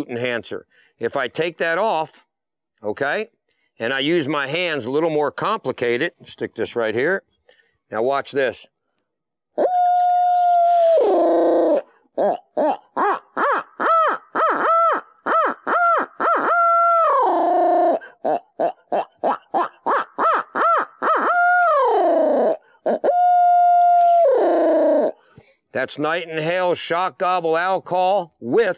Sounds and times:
Speech: 0.0 - 2.2, 2.8 - 7.3, 7.9 - 8.7, 25.8 - 28.7.

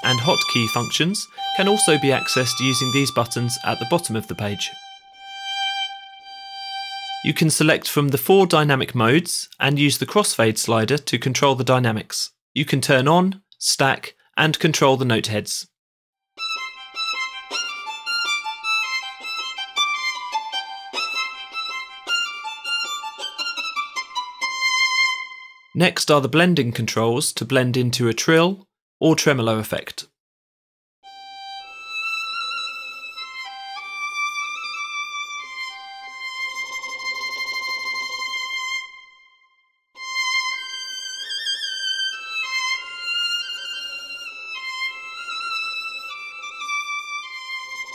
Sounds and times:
Speech: 0.0 - 4.8, 7.2 - 15.8, 25.8 - 30.1.

